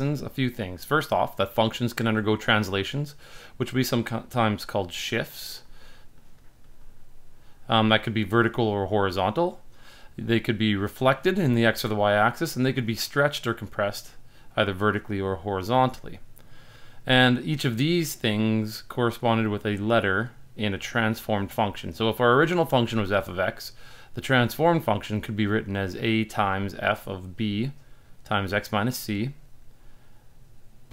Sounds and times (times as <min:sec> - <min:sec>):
Speech: 0:00.0 - 0:05.7, 0:07.6 - 0:09.6, 0:10.2 - 0:16.3, 0:17.0 - 0:29.5.